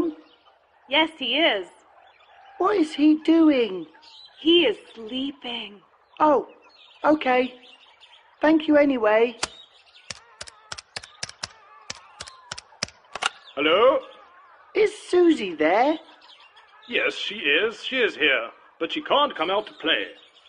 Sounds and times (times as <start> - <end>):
Speech: 0.0 - 0.2, 0.9 - 1.8, 2.6 - 7.6, 8.4 - 9.5, 14.8 - 16.0, 16.9 - 20.2.